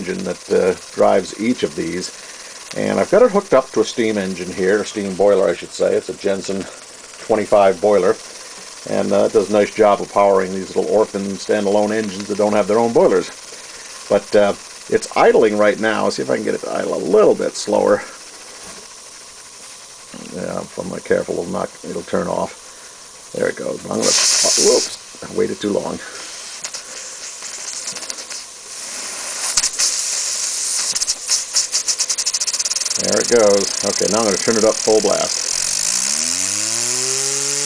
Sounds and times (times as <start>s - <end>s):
Speech: 0.0s - 2.1s, 2.8s - 8.2s, 8.8s - 13.4s, 14.1s - 18.2s, 20.2s - 22.6s, 23.3s - 26.2s, 33.0s - 35.4s.